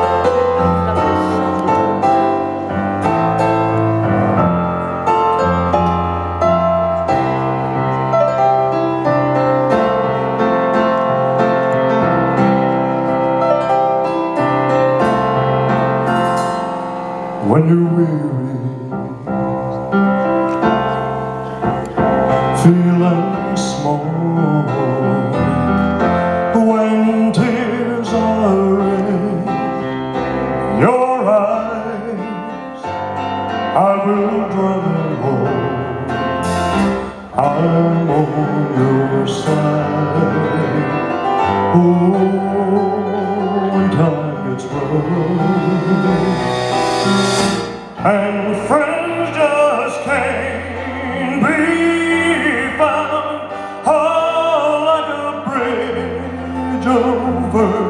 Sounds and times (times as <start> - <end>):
Music: 0.0 - 57.9.